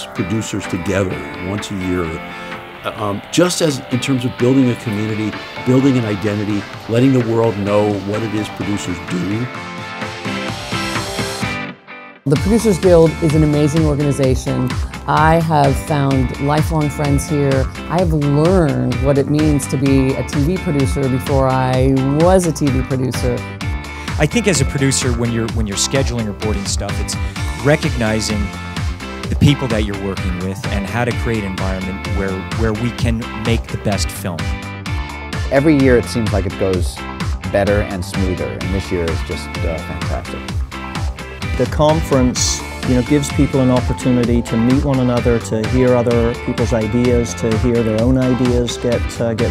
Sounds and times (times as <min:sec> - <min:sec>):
Speech: 0:00.0 - 0:02.2, 0:02.9 - 0:09.5, 0:12.3 - 0:23.4, 0:24.2 - 0:28.5, 0:29.3 - 0:34.5, 0:35.5 - 0:40.4, 0:41.6 - 0:49.5
Music: 0:00.0 - 0:49.5.